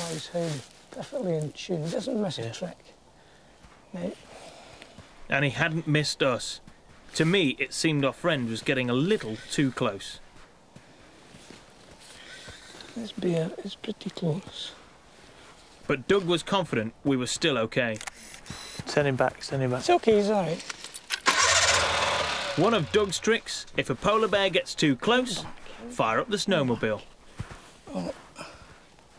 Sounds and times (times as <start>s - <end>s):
Speech: 0.0s - 2.9s, 7.2s - 10.2s, 15.9s - 18.0s, 22.6s - 27.1s.